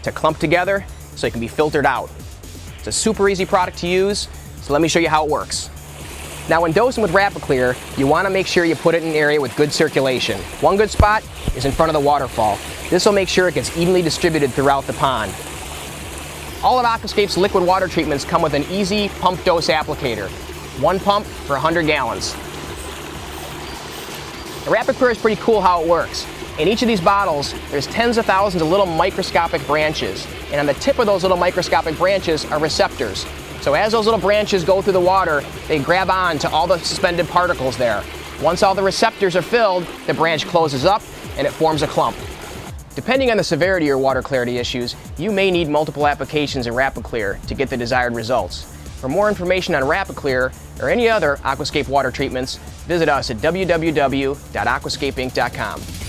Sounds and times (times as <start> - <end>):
Speech: 0.0 - 2.1, 2.8 - 5.7, 6.5 - 15.4, 16.6 - 22.4, 24.7 - 42.2, 43.0 - 55.8
Music: 0.0 - 56.0.